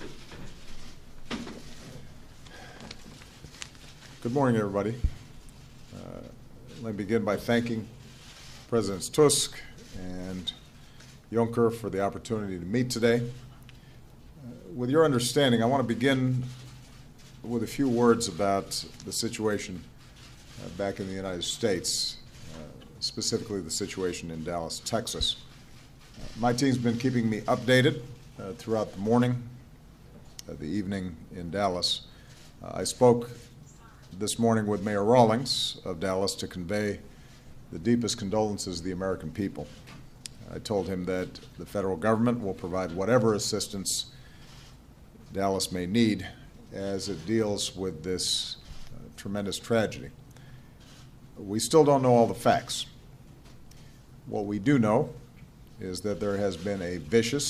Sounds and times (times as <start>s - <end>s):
Narration, monologue: 0.0s - 57.4s
Male speech, man speaking: 4.2s - 5.1s, 6.0s - 7.9s, 8.7s - 10.6s, 11.3s - 13.4s, 14.5s - 16.5s, 17.5s - 19.9s, 20.6s - 25.4s, 26.2s - 29.5s, 30.5s - 33.4s, 34.2s - 37.0s, 37.7s - 39.8s, 40.4s - 44.1s, 45.3s - 50.2s, 51.4s - 53.0s, 54.3s - 55.2s, 55.8s - 57.4s.